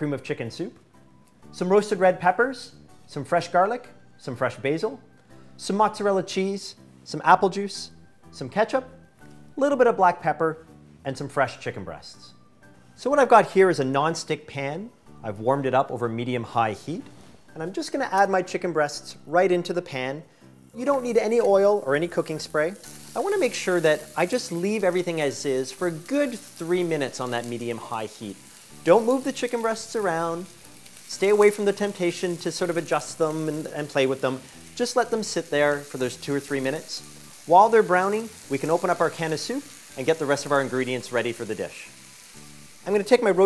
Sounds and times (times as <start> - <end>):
Speech: 0.0 - 0.8, 1.6 - 5.0, 5.6 - 8.9, 9.6 - 12.3, 13.0 - 20.2, 20.8 - 30.5, 31.1 - 41.9, 42.8 - 43.4
Music: 0.0 - 43.4.